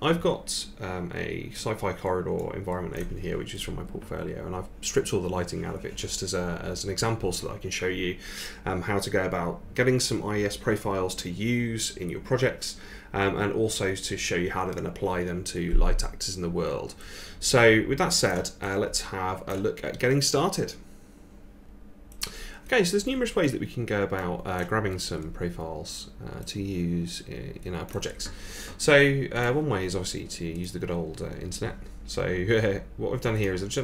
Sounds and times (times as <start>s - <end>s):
Speech: 0.0s - 20.8s, 22.7s - 33.8s.